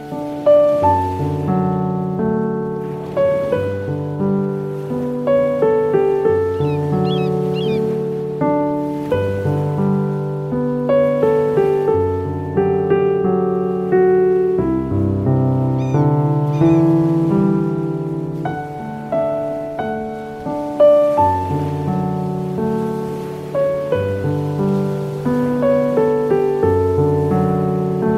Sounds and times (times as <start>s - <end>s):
New-age music: 0.0s - 28.1s.